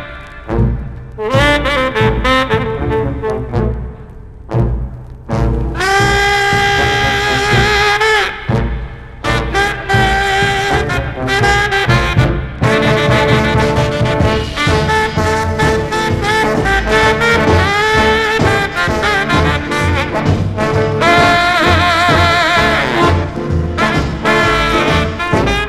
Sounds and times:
Swing music: 0:00.0 - 0:25.6.

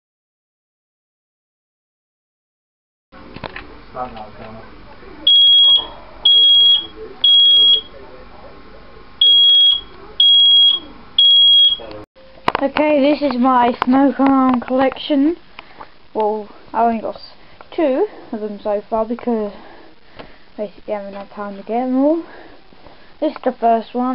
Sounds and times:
Smoke detector, smoke alarm: 0:05.3 - 0:07.9, 0:09.2 - 0:11.9.

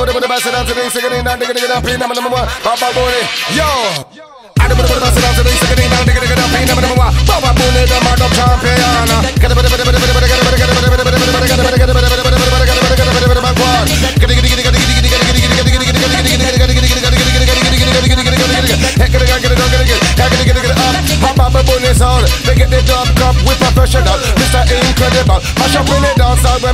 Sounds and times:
Music: 0:00.0 - 0:26.7.

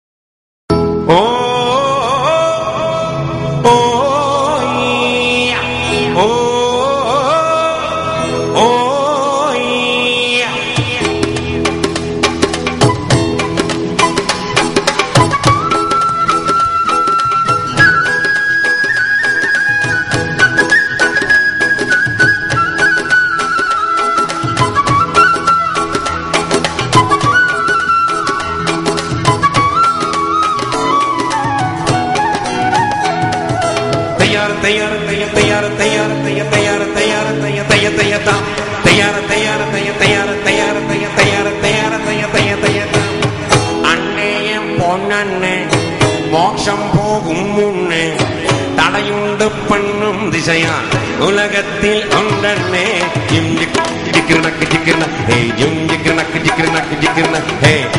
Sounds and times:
Gospel music: 0:00.7 - 0:57.9.

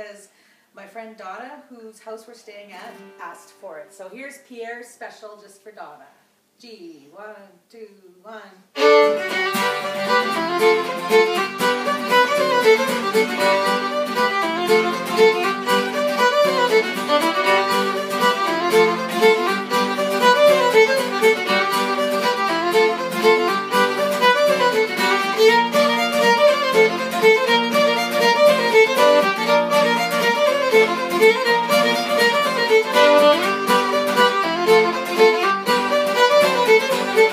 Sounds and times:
Violin, fiddle: 0:08.8 - 0:37.3.

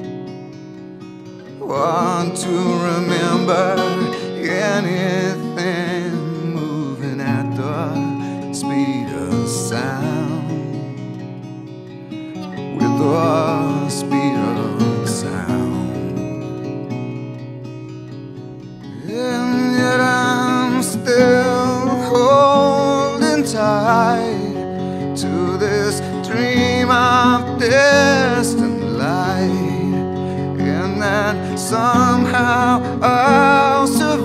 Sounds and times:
Music: 0:00.0 - 0:34.2.

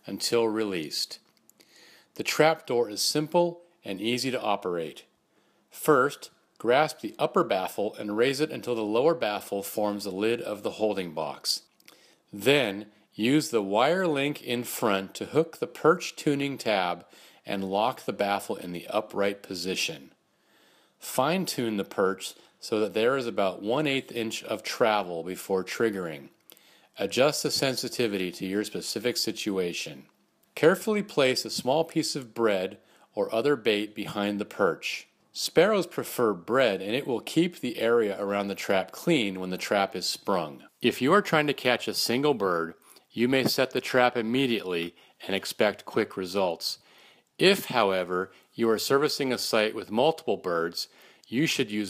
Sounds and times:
Speech: 0:00.0 - 0:01.3, 0:02.2 - 0:05.1, 0:05.7 - 0:11.7, 0:12.3 - 0:20.2, 0:21.0 - 0:26.4, 0:27.0 - 0:46.8, 0:47.4 - 0:51.8.

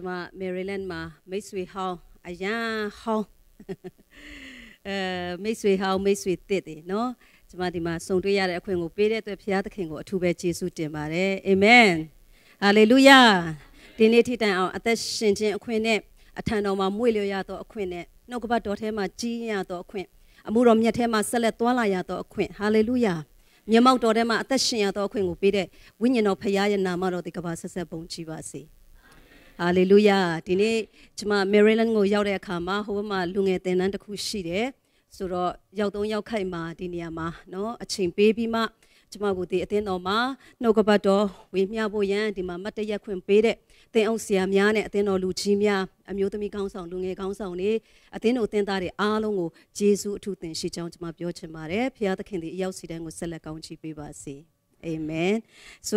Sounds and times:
Speech: 0:00.0 - 0:03.3, 0:04.9 - 0:28.6, 0:29.6 - 0:55.9.

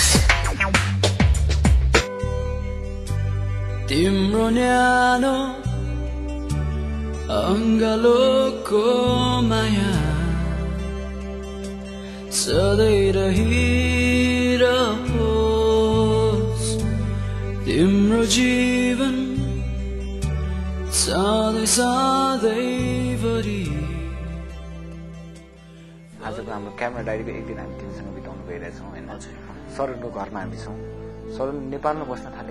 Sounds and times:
Music: 0:00.0 - 0:32.5
Speech: 0:26.2 - 0:32.5.

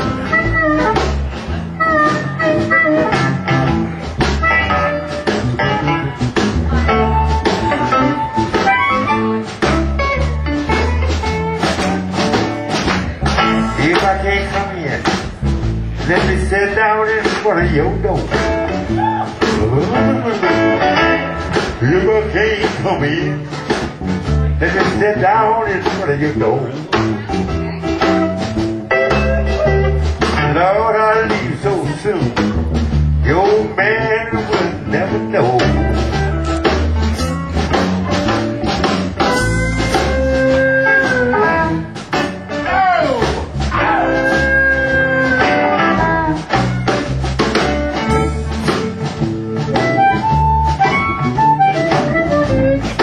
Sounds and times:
Music: 0:00.0 - 0:53.0
Speech: 0:13.2 - 0:15.2, 0:16.0 - 0:18.4, 0:24.6 - 0:28.2.

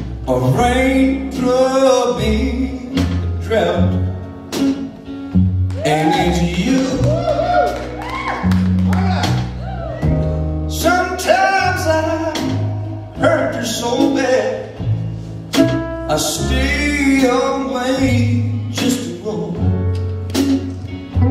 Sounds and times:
Wedding music: 0:00.0 - 0:21.3.

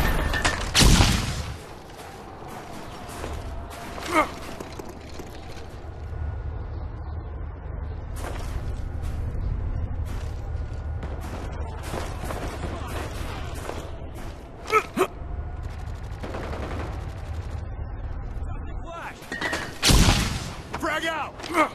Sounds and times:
Speech: 0:18.4 - 0:19.2, 0:20.8 - 0:21.7.

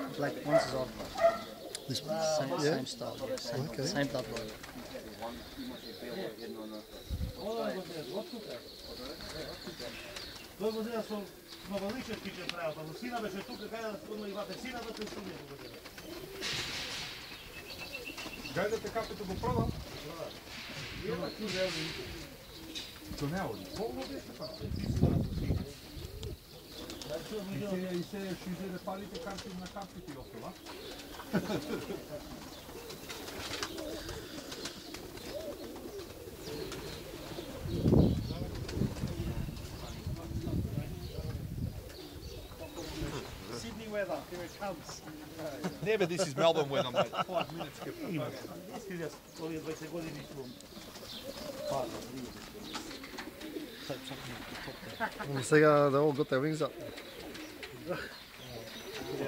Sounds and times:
Speech: 0:00.0 - 0:01.1, 0:01.8 - 0:15.8, 0:18.5 - 0:22.2, 0:23.1 - 0:25.8, 0:27.0 - 0:30.6, 0:38.2 - 0:41.5, 0:42.6 - 0:50.6, 0:53.8 - 0:56.8, 0:57.8 - 0:59.2
Pigeon, dove: 0:00.0 - 0:55.6, 0:56.2 - 0:59.2
Outside, rural or natural: 0:00.0 - 0:59.2.

